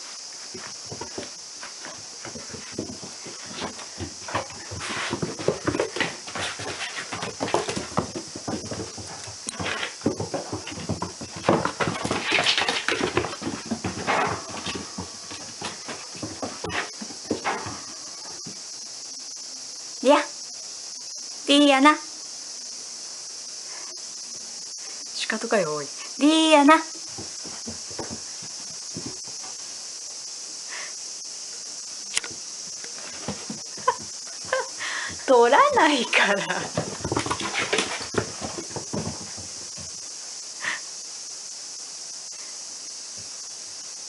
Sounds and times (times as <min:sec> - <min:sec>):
Speech: 0:20.0 - 0:20.4, 0:21.5 - 0:22.1, 0:25.2 - 0:26.9, 0:35.3 - 0:36.7.